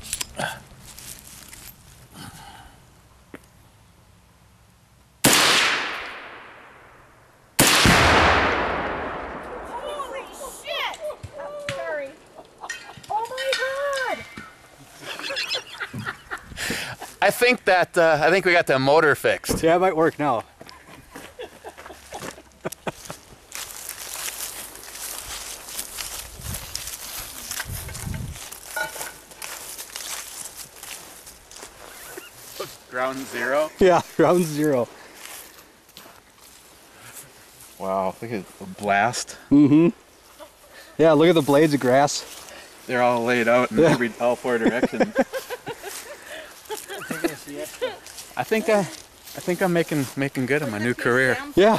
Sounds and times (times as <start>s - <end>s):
Gunshot, gunfire: 5.3s - 6.7s, 7.6s - 9.8s.